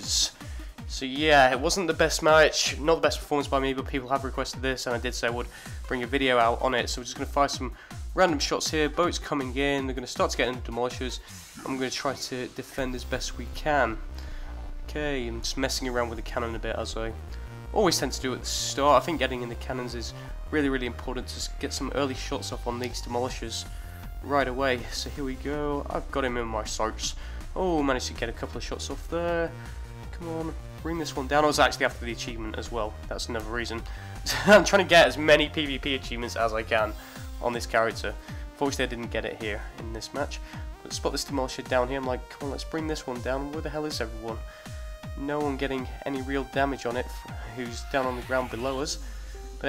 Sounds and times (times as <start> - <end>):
Speech: 0.0 - 14.0, 14.9 - 17.2, 17.8 - 44.4, 45.1 - 49.0.